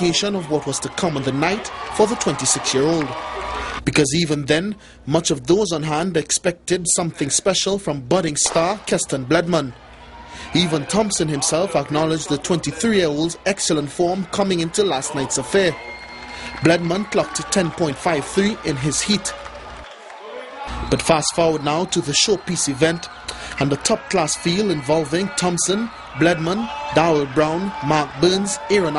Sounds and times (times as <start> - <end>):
Speech: 0.0 - 3.2, 3.8 - 9.7, 10.5 - 15.8, 16.6 - 19.4, 20.3 - 28.9
Inside, public space: 0.0 - 28.9.